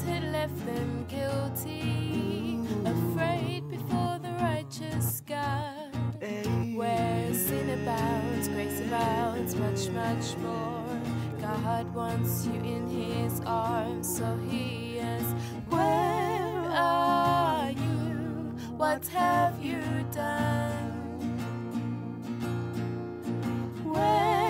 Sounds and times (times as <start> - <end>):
Music: 0.0 - 24.5.